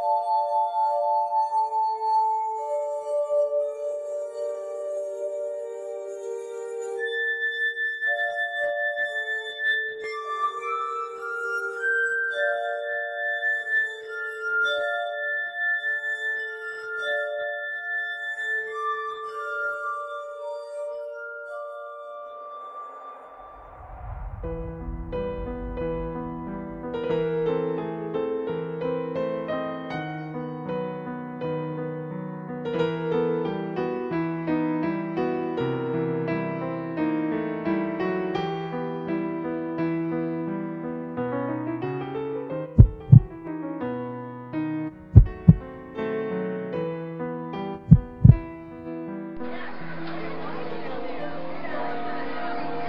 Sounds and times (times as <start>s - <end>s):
Music: 0.0s - 52.8s.